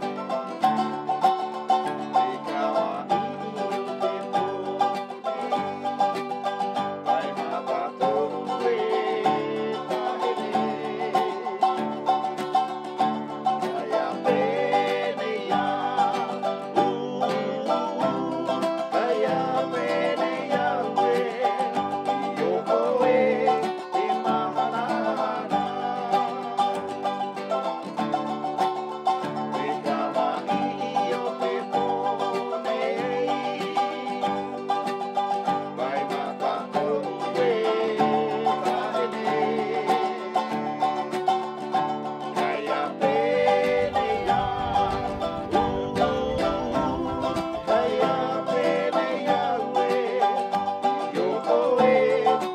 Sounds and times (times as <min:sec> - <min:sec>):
Music: 0:00.0 - 0:52.5.